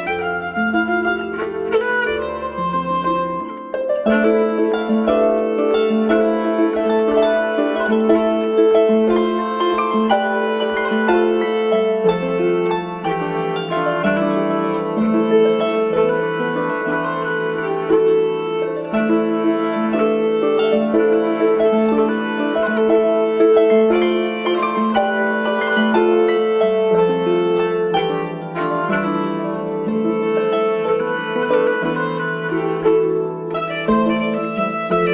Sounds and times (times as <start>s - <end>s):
Harp: 0.0s - 35.1s
Pizzicato: 0.0s - 35.1s.